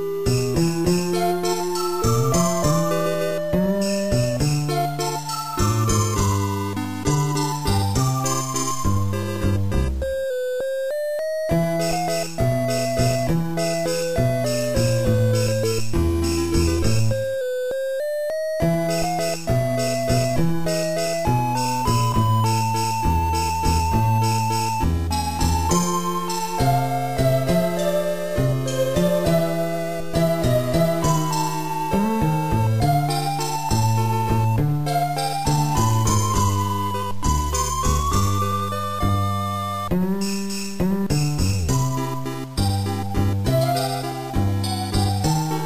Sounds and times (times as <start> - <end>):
Video game music: 0.0 - 45.6.